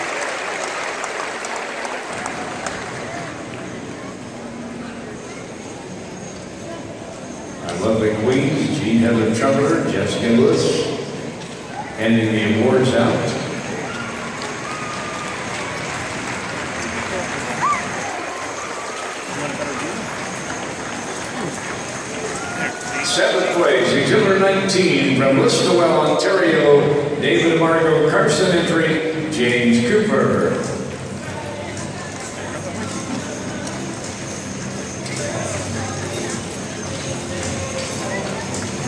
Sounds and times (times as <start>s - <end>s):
Speech: 7.6s - 11.1s, 11.9s - 13.6s, 23.0s - 33.7s.